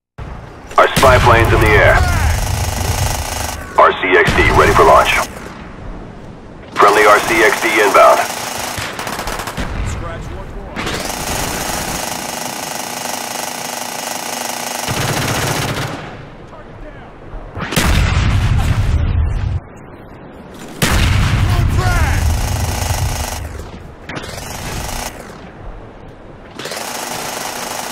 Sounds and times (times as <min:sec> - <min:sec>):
Outside, rural or natural: 0:00.1 - 0:27.9.